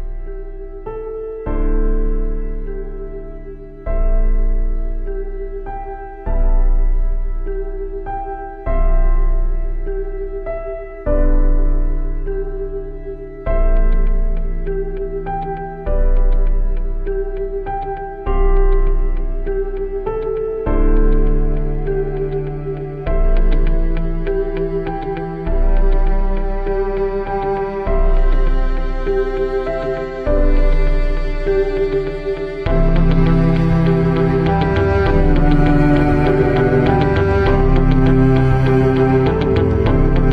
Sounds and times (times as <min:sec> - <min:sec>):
New-age music: 0:00.0 - 0:40.3.